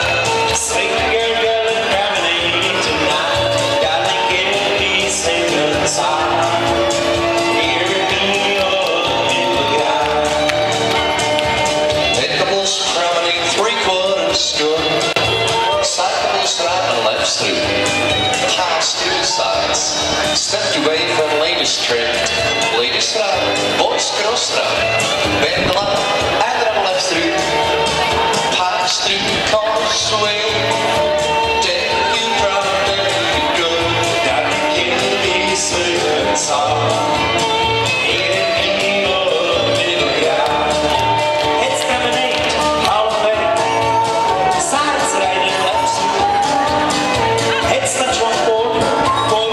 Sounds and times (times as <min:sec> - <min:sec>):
Speech: 0:00.0 - 0:06.6, 0:12.2 - 0:30.9, 0:31.6 - 0:37.1, 0:41.6 - 0:49.5
Music: 0:00.0 - 0:49.5.